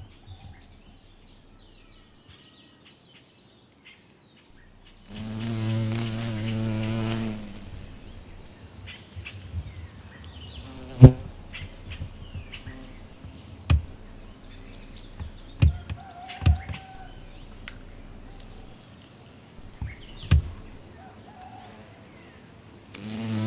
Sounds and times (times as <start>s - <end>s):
Bee, wasp, etc.: 4.6s - 23.4s
Fly, housefly: 4.6s - 23.4s.